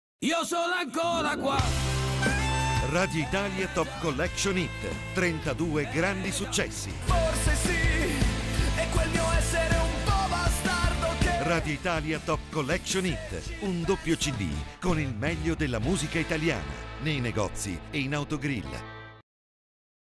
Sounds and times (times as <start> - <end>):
Music: 0.2 - 19.2
Speech: 2.8 - 6.9, 11.4 - 18.8.